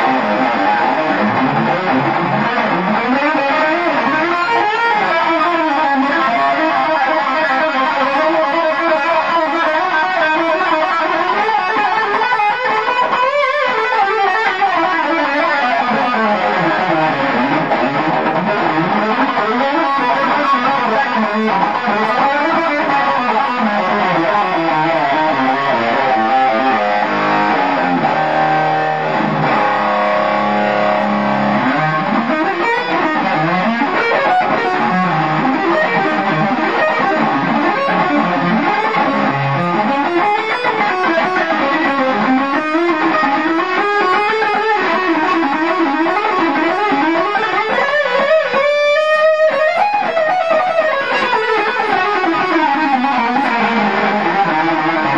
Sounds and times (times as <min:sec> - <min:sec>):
Music: 0:00.0 - 0:55.1.